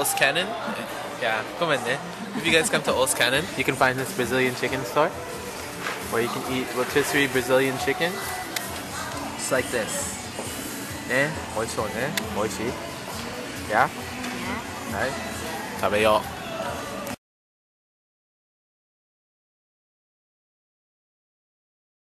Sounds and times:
Music: 0.0s - 17.2s.

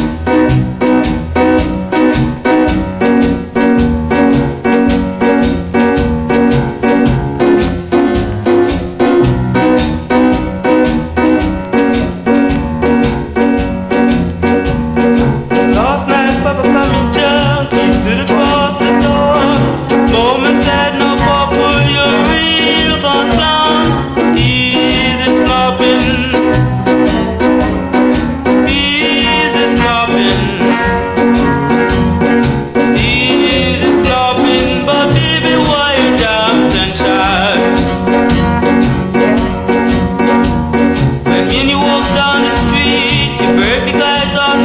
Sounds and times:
Jazz: 0.0s - 44.6s.

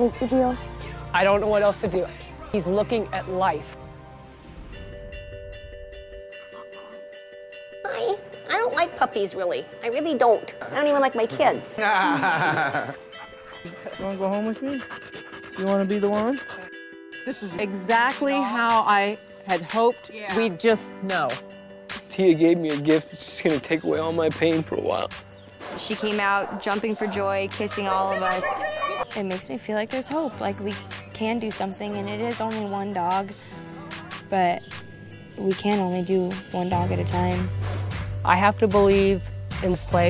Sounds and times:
Outside, rural or natural: 0.0s - 8.5s, 11.8s - 40.1s
Music: 0.0s - 40.1s.

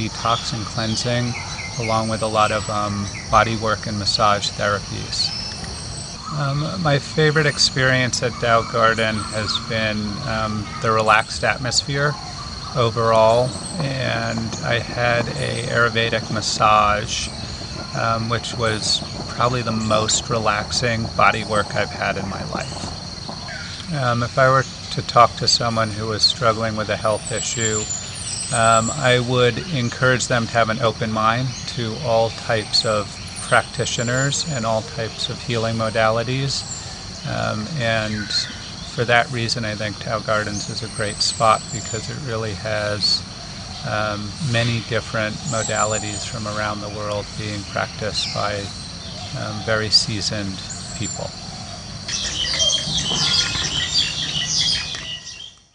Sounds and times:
Speech: 0.0s - 5.4s, 6.2s - 22.9s, 23.8s - 27.9s, 28.5s - 48.7s, 49.3s - 51.4s
Outside, rural or natural: 0.0s - 55.7s
Chirp, tweet: 0.2s - 11.1s, 25.8s - 39.3s, 43.0s - 55.7s.

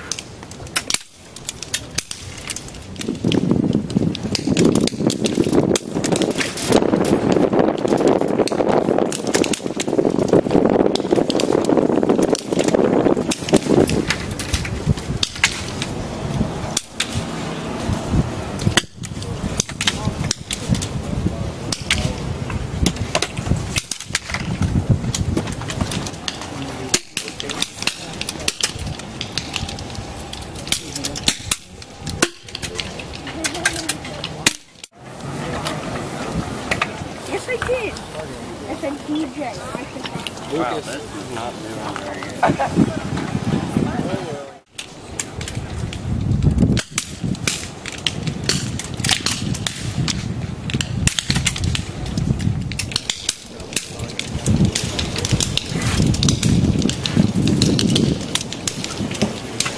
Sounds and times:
Wind noise (microphone): 1.2s - 34.5s, 40.5s - 59.7s.

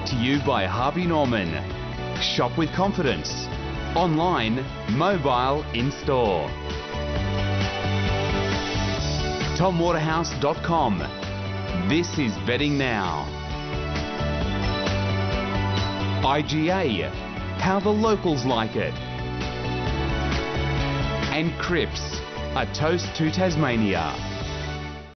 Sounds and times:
Speech: 0.0s - 1.6s, 2.2s - 6.5s, 9.6s - 11.1s, 11.8s - 13.3s, 16.2s - 19.0s, 21.3s - 24.2s
Music: 0.0s - 25.1s.

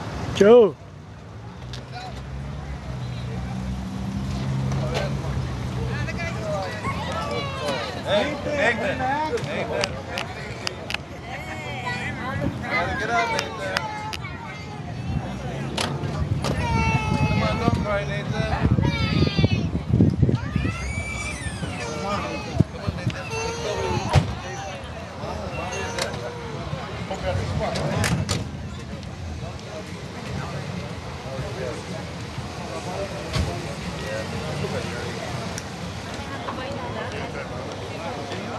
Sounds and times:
Vehicle: 0.0s - 38.5s.

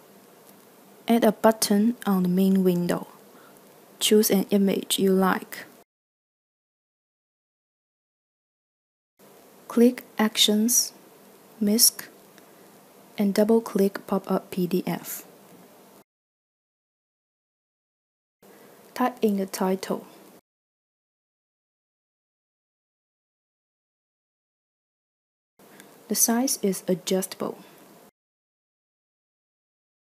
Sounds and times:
Speech: 1.1s - 3.2s, 4.0s - 5.8s, 9.7s - 11.0s, 11.6s - 12.2s, 13.2s - 15.3s, 19.0s - 20.2s, 26.1s - 27.7s.

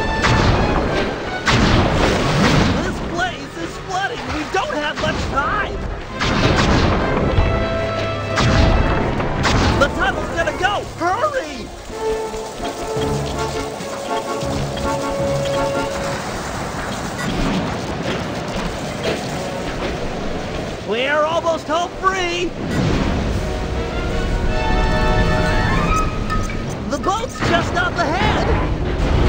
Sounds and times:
Smash, crash: 0.0s - 3.2s, 8.3s - 20.2s.

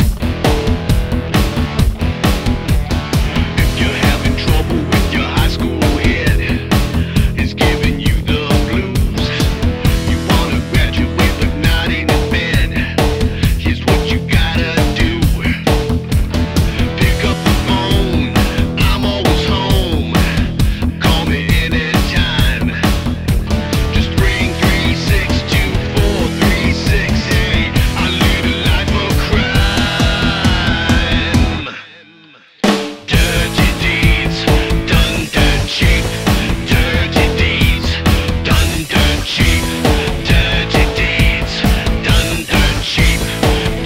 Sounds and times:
Music: 0.0s - 43.8s.

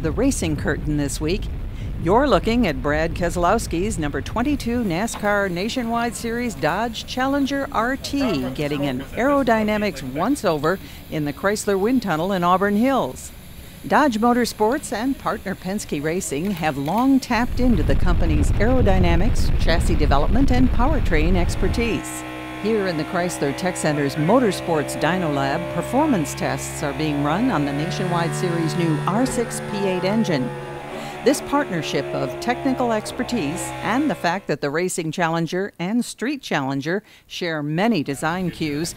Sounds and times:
Speech: 0.0s - 13.3s, 13.9s - 30.5s, 31.2s - 38.9s.

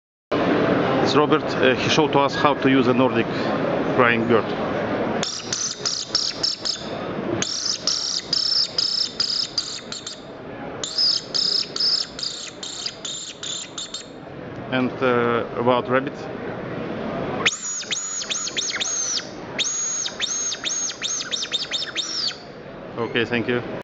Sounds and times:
Speech: 1.0s - 3.3s, 3.9s - 4.6s, 14.7s - 16.5s, 23.0s - 23.7s.

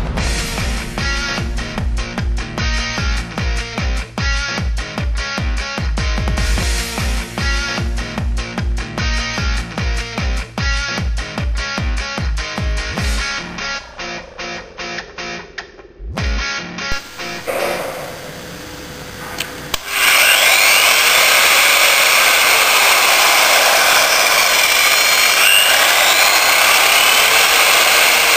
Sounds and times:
Music: 0.0s - 17.5s, 19.7s - 28.3s.

